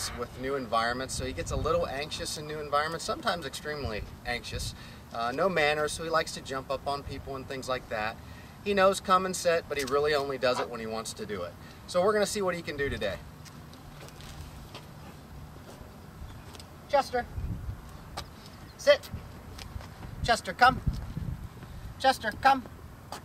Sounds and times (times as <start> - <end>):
Speech: 0.0 - 13.2, 16.9 - 17.3, 18.8 - 19.1, 20.2 - 20.8, 22.0 - 22.7.